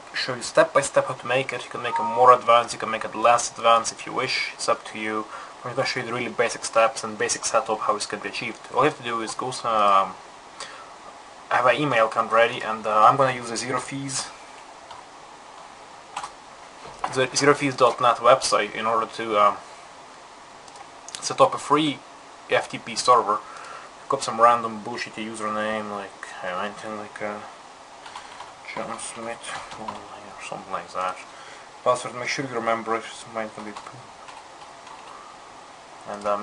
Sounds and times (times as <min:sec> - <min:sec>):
Speech: 0:00.2 - 0:10.2, 0:11.5 - 0:14.4, 0:17.0 - 0:19.6, 0:21.1 - 0:23.4, 0:24.1 - 0:27.6, 0:28.7 - 0:34.1, 0:36.1 - 0:36.4.